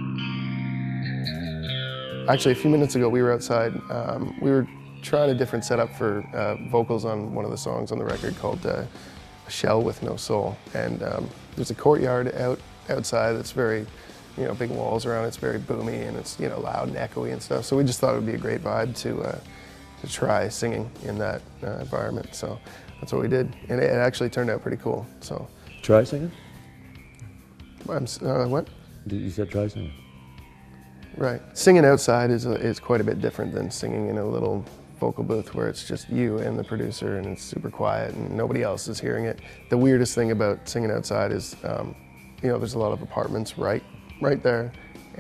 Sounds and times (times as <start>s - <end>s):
Music: 0.0s - 45.2s
Speech: 2.3s - 8.9s, 9.5s - 19.4s, 20.0s - 26.4s, 27.9s - 30.0s, 31.2s - 45.2s.